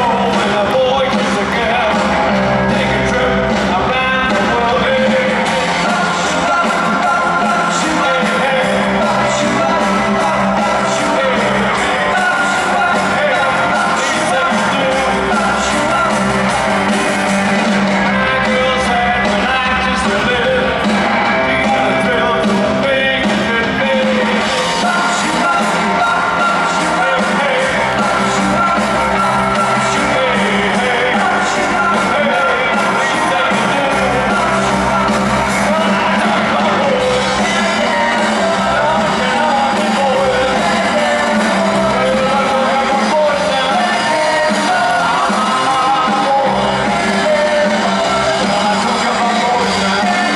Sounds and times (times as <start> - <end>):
Rock and roll: 0.0 - 50.3.